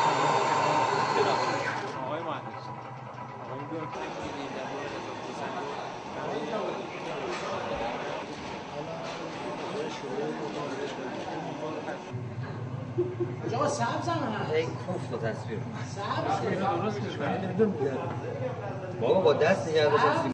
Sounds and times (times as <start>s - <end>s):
Speech: 3.5s - 12.1s.